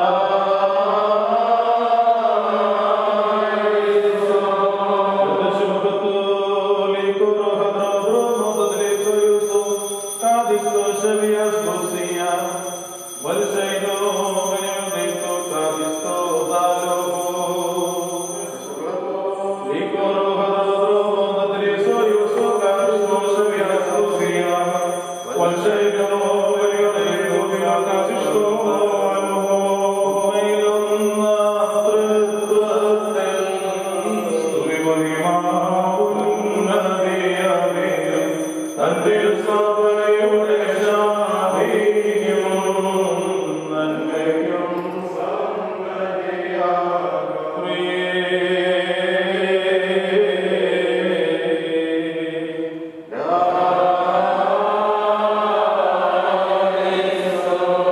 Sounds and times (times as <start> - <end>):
Chant: 0.0 - 57.9.